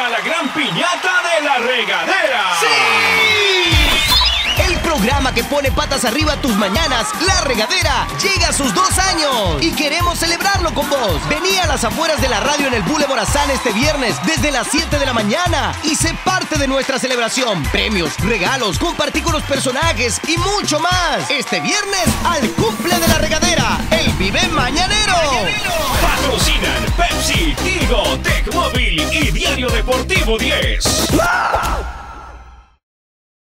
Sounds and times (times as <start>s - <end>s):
Speech: 0.0s - 3.6s, 4.6s - 31.3s
Disco: 2.5s - 31.3s.